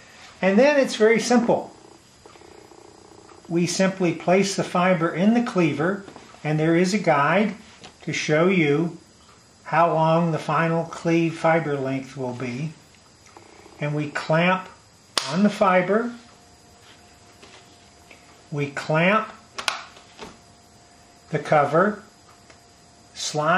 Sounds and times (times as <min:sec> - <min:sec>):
Speech: 0:00.4 - 0:01.7, 0:03.5 - 0:09.0, 0:09.7 - 0:12.8, 0:13.8 - 0:16.2, 0:18.5 - 0:19.4, 0:21.3 - 0:22.1, 0:23.2 - 0:23.5.